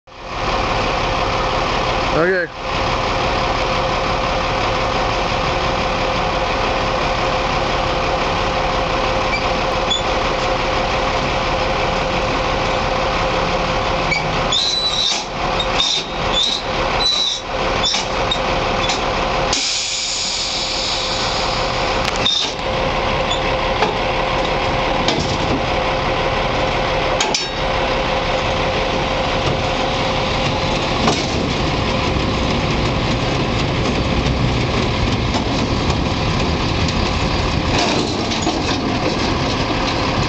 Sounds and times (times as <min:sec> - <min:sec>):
Truck: 0:00.0 - 0:40.2.